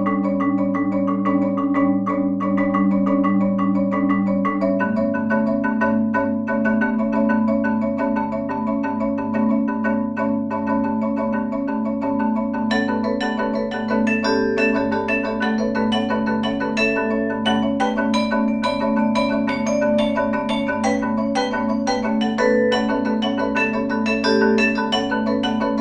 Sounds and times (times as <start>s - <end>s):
Marimba, xylophone: 0.0s - 25.8s.